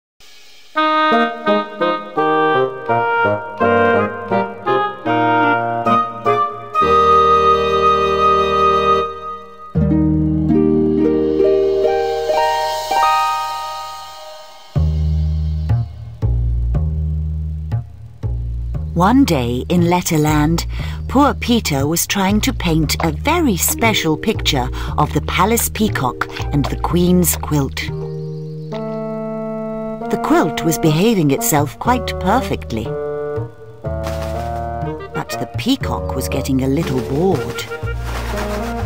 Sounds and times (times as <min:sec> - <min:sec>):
Music: 0:00.2 - 0:38.8.